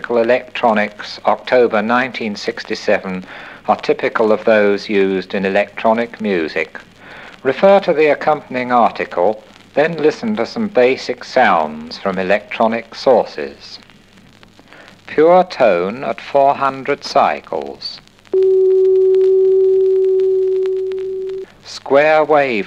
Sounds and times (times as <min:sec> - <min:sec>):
Speech: 0:00.0 - 0:13.8, 0:15.1 - 0:18.0, 0:21.7 - 0:22.6.